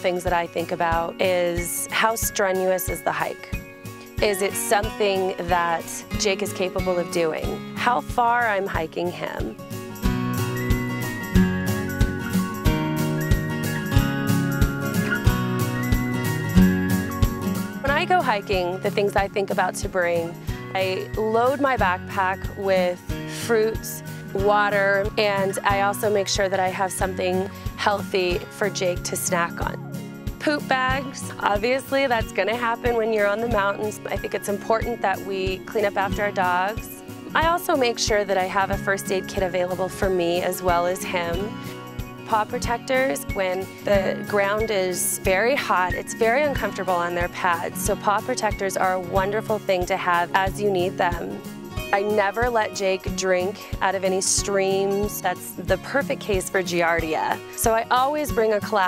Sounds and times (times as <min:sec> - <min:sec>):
Speech: 0:00.0 - 0:03.5, 0:04.2 - 0:09.6, 0:17.9 - 0:29.8, 0:30.4 - 0:41.5, 0:42.3 - 0:51.4, 0:52.0 - 0:58.8
Music: 0:00.0 - 0:58.8.